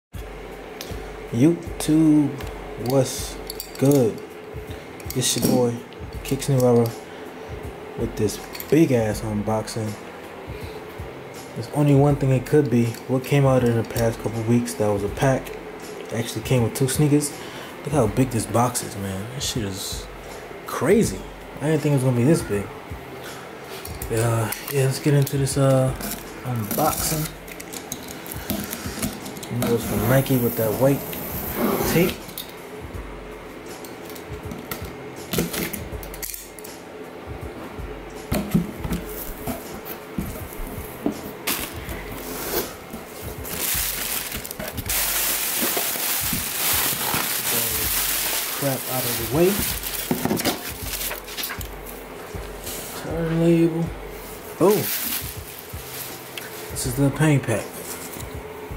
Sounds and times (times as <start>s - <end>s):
Music: 0.1s - 58.7s
Speech: 1.3s - 4.2s, 5.1s - 7.0s, 8.0s - 10.0s, 11.6s - 15.4s, 16.1s - 20.0s, 20.7s - 22.7s, 24.1s - 27.3s, 29.5s - 31.0s, 47.4s - 47.9s, 48.6s - 49.7s, 53.0s - 54.0s, 54.6s - 54.9s, 56.8s - 57.8s.